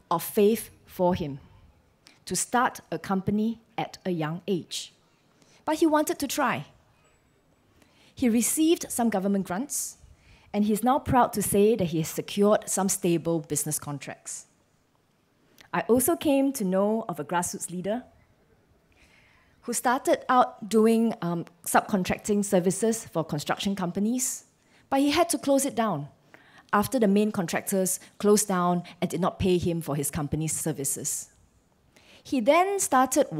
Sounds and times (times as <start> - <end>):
Speech: 0.1 - 1.5, 2.3 - 4.9, 5.7 - 6.8, 8.2 - 10.0, 10.6 - 14.5, 15.7 - 18.1, 19.6 - 26.1, 26.7 - 31.3, 32.3 - 33.3.